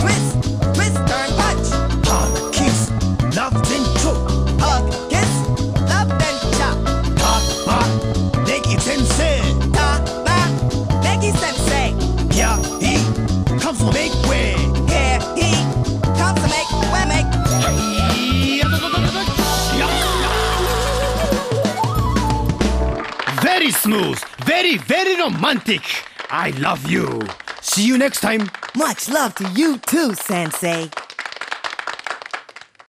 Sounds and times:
Music: 0:00.0 - 0:24.4
Speech: 0:23.3 - 0:30.9.

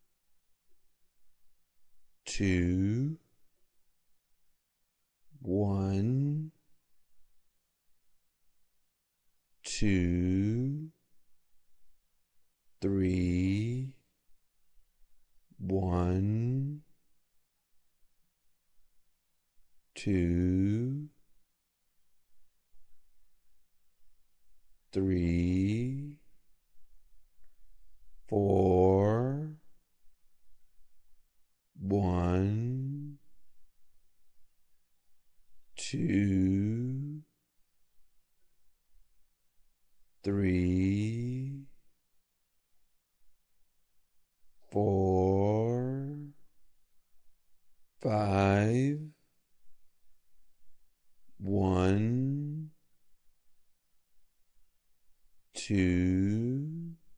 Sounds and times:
Speech: 0:02.3 - 0:03.3, 0:05.4 - 0:06.6, 0:09.7 - 0:11.0, 0:12.8 - 0:14.0, 0:15.6 - 0:16.9, 0:20.0 - 0:21.2, 0:25.0 - 0:26.3, 0:28.3 - 0:29.7, 0:31.8 - 0:33.2, 0:35.8 - 0:37.3, 0:40.3 - 0:41.7, 0:44.7 - 0:46.4, 0:48.0 - 0:49.2, 0:51.4 - 0:52.8, 0:55.6 - 0:57.0.

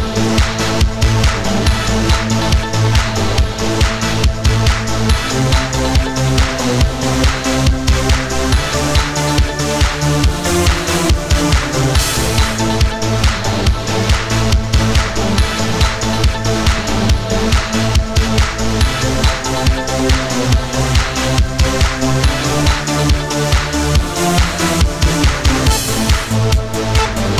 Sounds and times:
Dance music: 0:00.0 - 0:27.4.

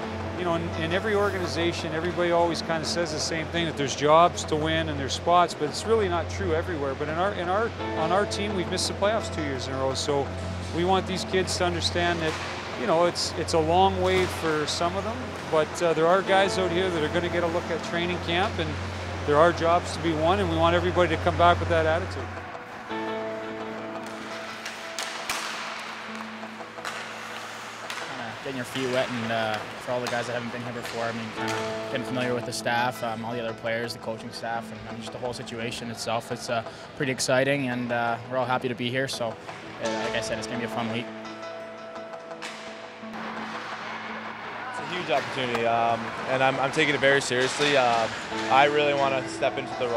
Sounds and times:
Music: 0:00.0 - 0:49.9.

